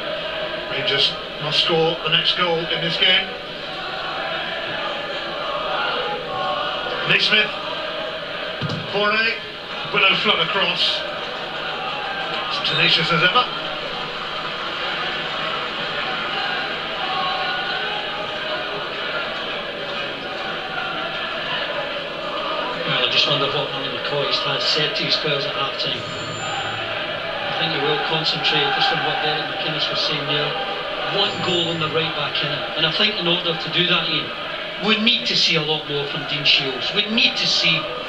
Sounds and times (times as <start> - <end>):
Speech: 0.7 - 3.4, 7.0 - 7.6, 8.8 - 11.1, 12.5 - 13.5, 22.8 - 26.7, 27.4 - 38.0.